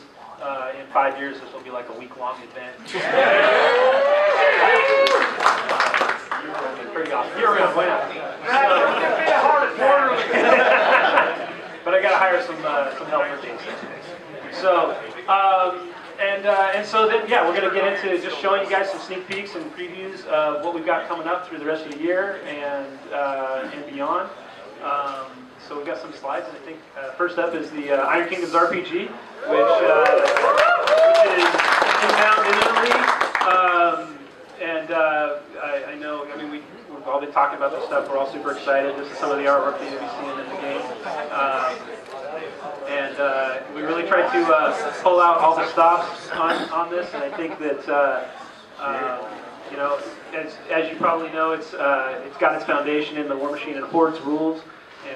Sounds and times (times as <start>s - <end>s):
Male speech, man speaking: 0.0s - 3.2s, 6.4s - 30.3s, 31.1s - 55.1s.